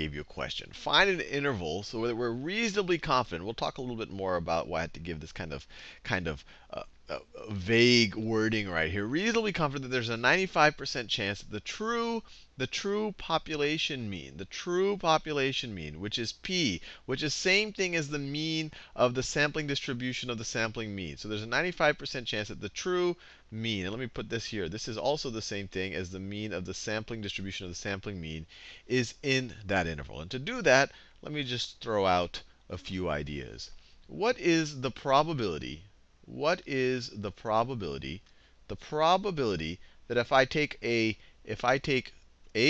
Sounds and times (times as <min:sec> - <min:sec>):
Speech: 0:00.0 - 0:42.7.